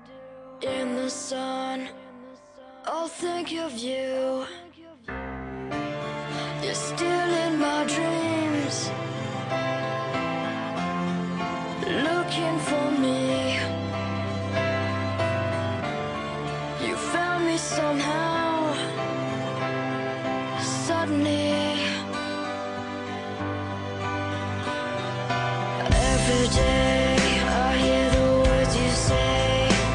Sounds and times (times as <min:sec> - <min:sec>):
Music: 0:00.0 - 0:29.9.